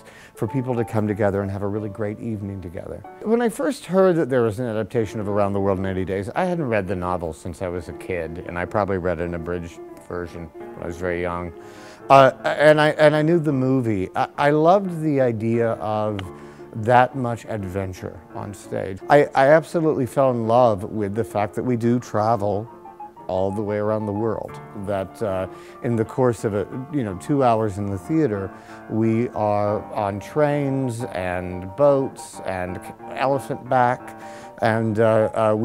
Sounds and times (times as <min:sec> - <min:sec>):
Speech: 0:00.0 - 0:22.7, 0:23.3 - 0:35.6
Music: 0:00.0 - 0:35.6.